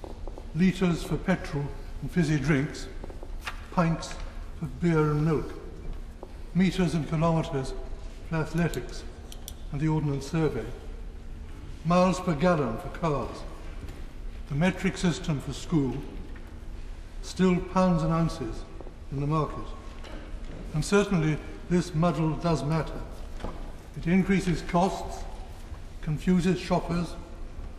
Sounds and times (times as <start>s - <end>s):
Narration, monologue: 0.0s - 27.7s
Male speech, man speaking: 0.6s - 3.0s, 3.7s - 5.6s, 6.6s - 9.1s, 9.7s - 10.8s, 11.8s - 13.6s, 14.5s - 16.2s, 17.2s - 19.8s, 20.7s - 23.1s, 24.0s - 25.3s, 26.0s - 27.3s.